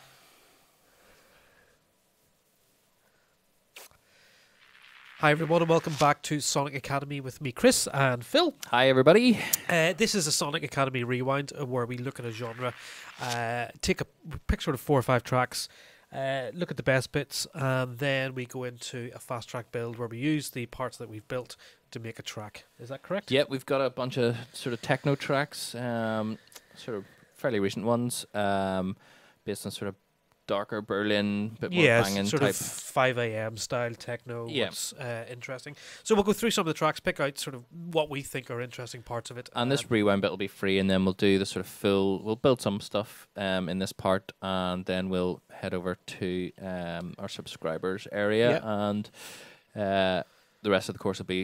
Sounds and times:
Speech: 5.2s - 49.1s, 49.8s - 51.4s.

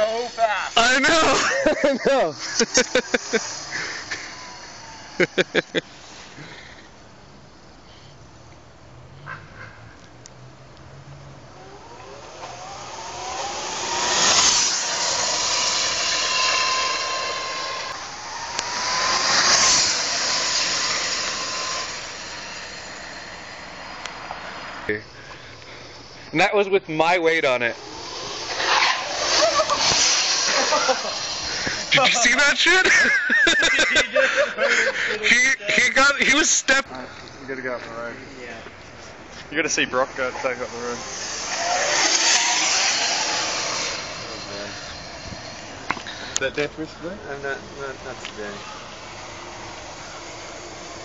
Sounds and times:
Motorcycle: 0.0s - 26.2s, 27.6s - 32.2s, 37.9s - 51.0s
Outside, urban or manmade: 0.0s - 51.0s
Speech: 31.9s - 32.9s, 35.2s - 38.7s.

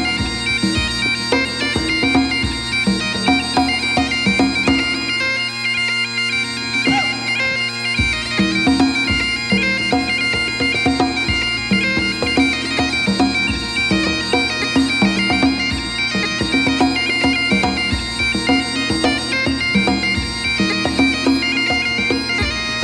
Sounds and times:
Bagpipes: 0.0s - 22.8s
Wind instrument, woodwind instrument: 0.0s - 22.8s.

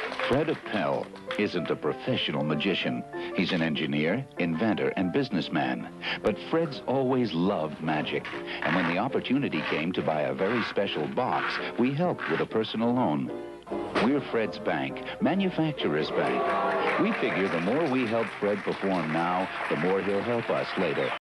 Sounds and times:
Music: 0.0s - 21.2s
Speech: 0.2s - 13.3s, 14.0s - 21.2s.

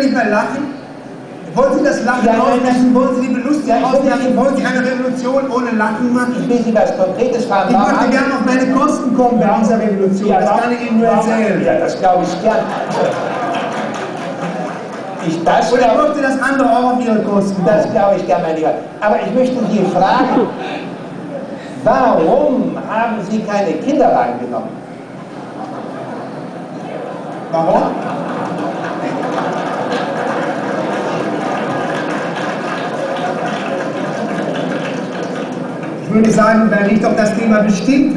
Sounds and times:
Speech: 0.0s - 0.8s, 1.5s - 13.1s, 15.2s - 20.6s, 21.8s - 24.8s, 36.0s - 38.1s
Inside, large room or hall: 0.0s - 38.1s.

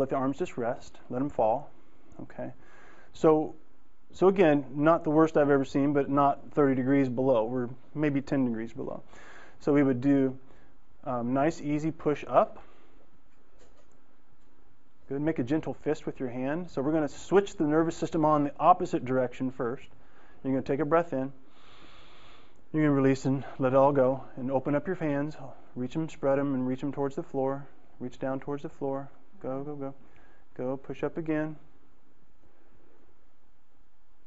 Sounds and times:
Speech: 0.0s - 2.6s, 3.2s - 3.6s, 4.2s - 10.4s, 11.1s - 12.6s, 15.1s - 21.4s, 22.7s - 30.0s, 30.6s - 31.6s
Silence: 0.0s - 21.5s, 22.4s - 34.2s.

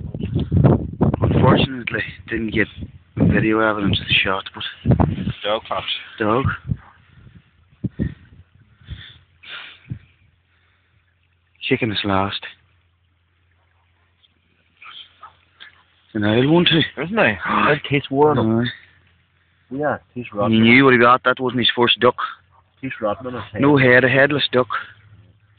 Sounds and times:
Speech: 1.3s - 6.6s, 11.6s - 12.6s, 16.1s - 18.8s, 19.7s - 25.0s.

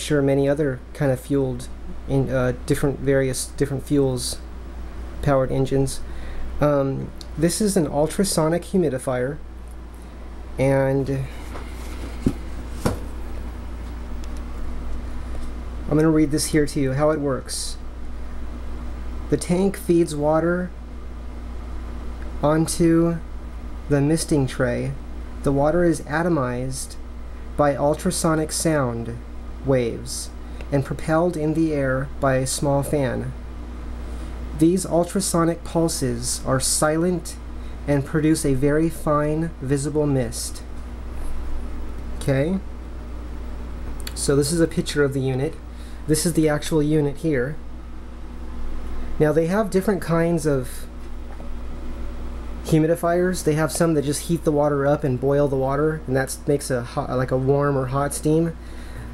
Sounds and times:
Speech: 0.0s - 4.5s, 5.2s - 9.4s, 10.6s - 11.4s, 15.9s - 17.8s, 19.3s - 20.8s, 22.4s - 23.3s, 23.9s - 27.0s, 27.6s - 33.4s, 34.5s - 40.7s, 42.2s - 42.7s, 44.1s - 47.6s, 49.2s - 50.9s, 52.6s - 58.6s.

